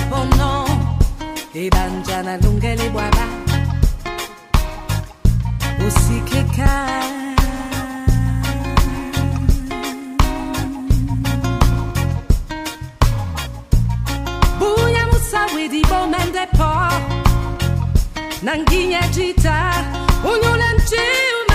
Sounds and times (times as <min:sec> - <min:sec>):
Music: 0:00.0 - 0:21.5.